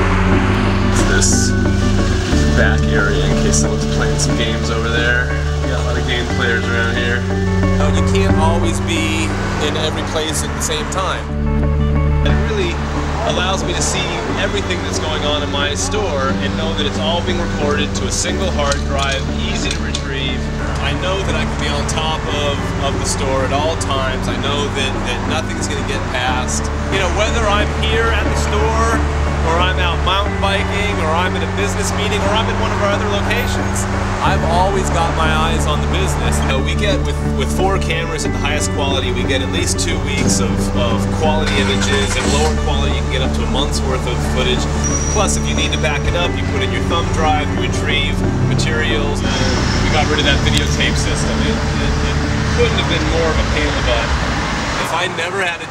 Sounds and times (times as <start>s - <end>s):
Music: 0.0s - 55.7s
Vehicle: 0.0s - 55.7s
Speech: 0.9s - 1.6s, 2.4s - 11.3s, 12.2s - 54.2s, 54.8s - 55.7s.